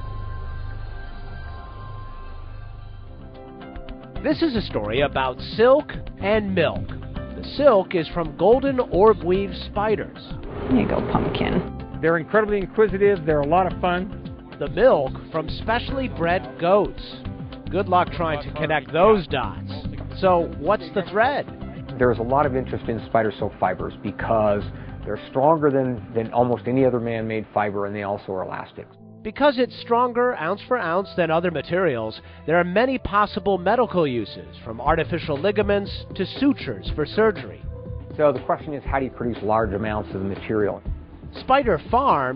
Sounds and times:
Music: 0.0s - 42.3s
Speech: 4.2s - 37.6s, 38.2s - 40.8s, 41.4s - 42.3s.

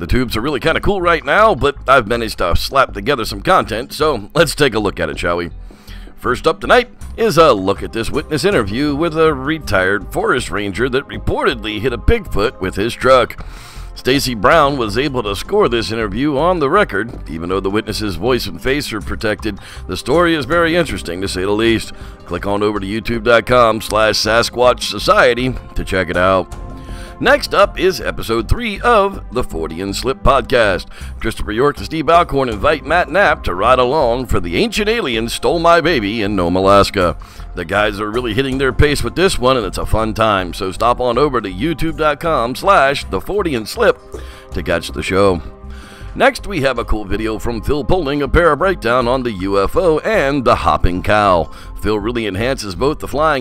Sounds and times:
Speech: 0.0s - 5.5s, 6.2s - 13.4s, 14.0s - 26.5s, 27.2s - 44.0s, 44.6s - 45.4s, 46.2s - 53.4s
Music: 0.0s - 53.4s.

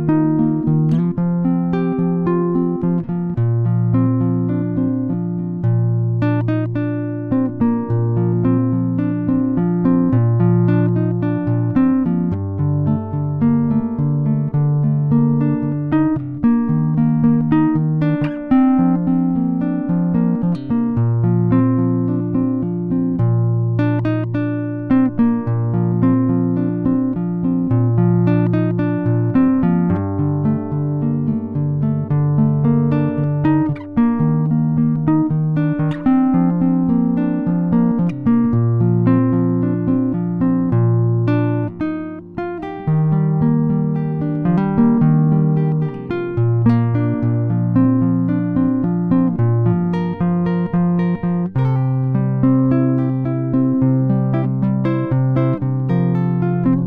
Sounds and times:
Strum: 0.0s - 56.8s.

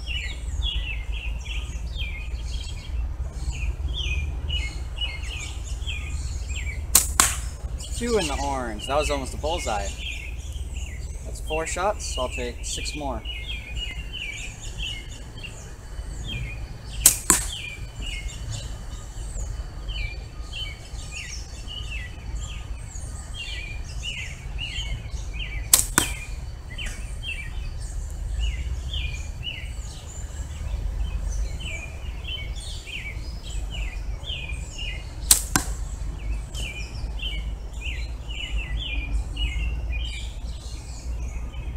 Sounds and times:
Environmental noise: 0.0s - 41.7s
Outside, rural or natural: 0.0s - 41.7s.

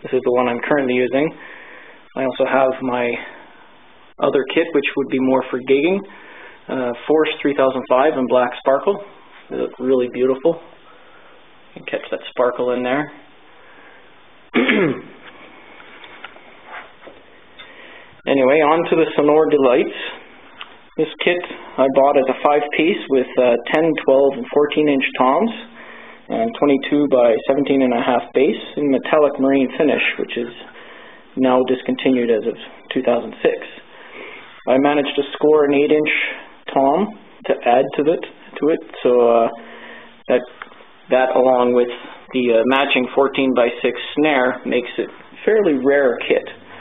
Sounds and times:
Speech: 0.0s - 1.4s, 2.1s - 3.4s, 4.2s - 6.1s, 6.7s - 10.8s, 11.8s - 13.3s, 18.2s - 20.3s, 20.9s - 30.8s, 31.4s - 33.9s, 34.6s - 39.6s, 40.2s - 46.6s.

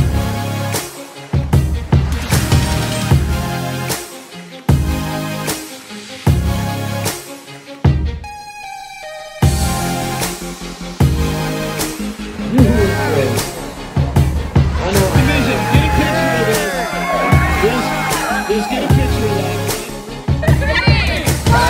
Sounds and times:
Music: 0.0s - 21.7s
Speech: 14.8s - 16.8s, 17.6s - 19.9s.

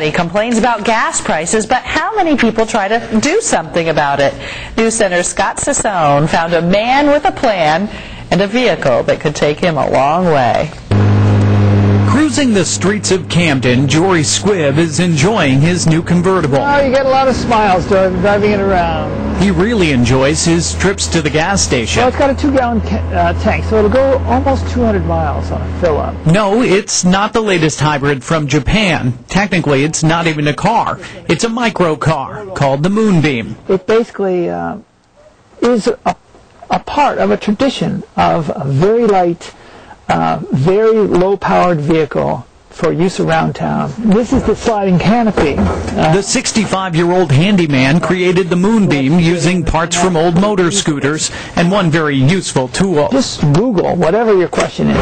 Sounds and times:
Speech: 12.1s - 34.9s, 35.6s - 55.0s.

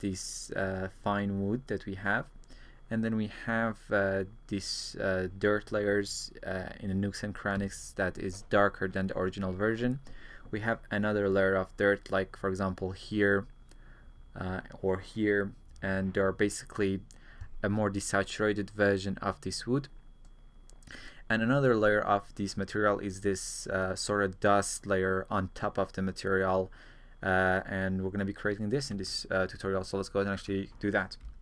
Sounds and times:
Speech: 0.0s - 2.3s, 2.9s - 13.5s, 14.4s - 19.9s, 21.3s - 31.3s.

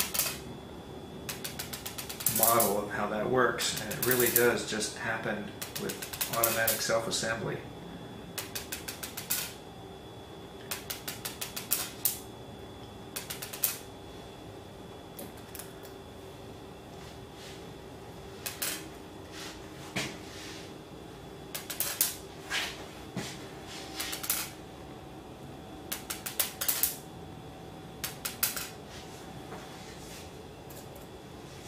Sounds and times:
Speech: 2.3s - 7.7s.

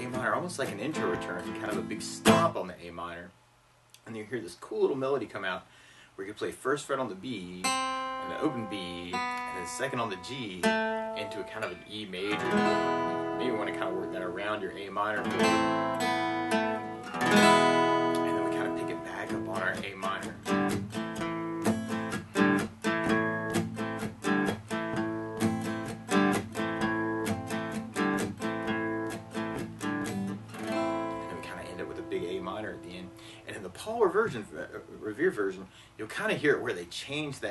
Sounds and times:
Strum: 0.0s - 2.6s, 7.6s - 34.9s
Speech: 0.0s - 3.4s, 4.0s - 12.5s, 13.4s - 15.4s, 18.2s - 20.4s, 31.1s - 37.5s.

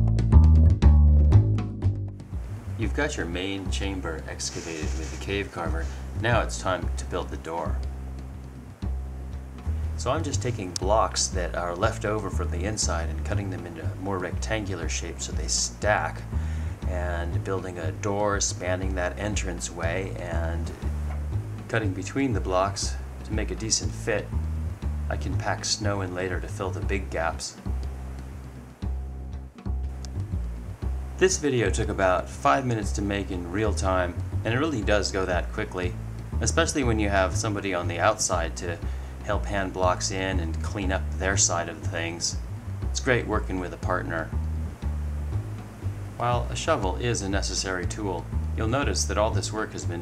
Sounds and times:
Music: 0.0s - 50.0s
Speech: 2.8s - 7.8s, 10.0s - 16.3s, 16.9s - 20.8s, 21.7s - 24.4s, 25.1s - 27.6s, 31.2s - 42.4s, 43.0s - 44.4s, 46.2s - 50.0s.

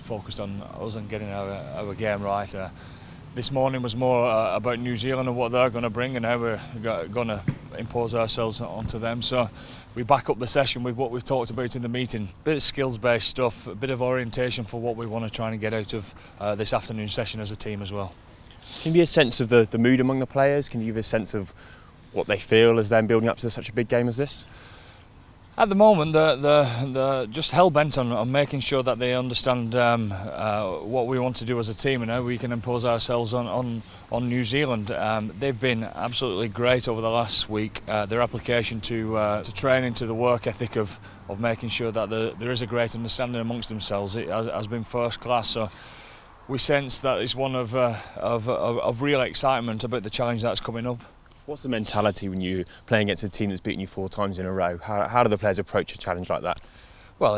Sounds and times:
Speech: 0.0s - 2.8s, 3.4s - 24.5s, 25.6s - 45.8s, 46.5s - 56.6s.

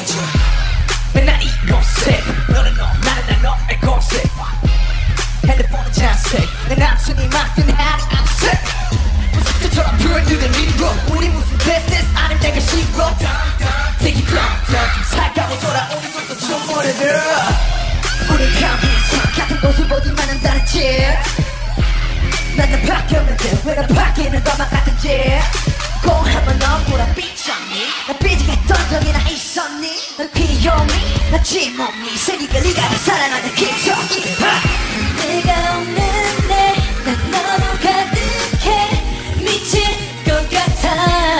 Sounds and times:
Pop music: 0.0s - 41.3s.

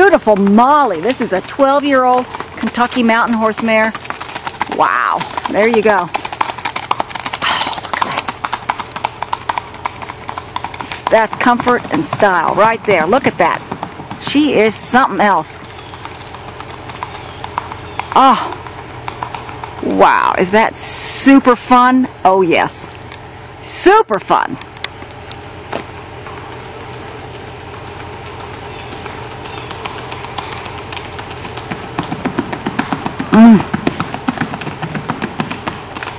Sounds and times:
Clip-clop: 0.0s - 36.1s.

